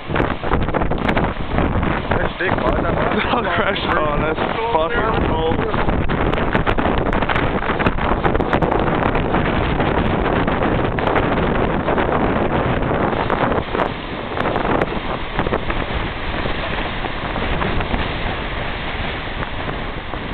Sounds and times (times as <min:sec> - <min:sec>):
Speech: 0:02.2 - 0:05.8.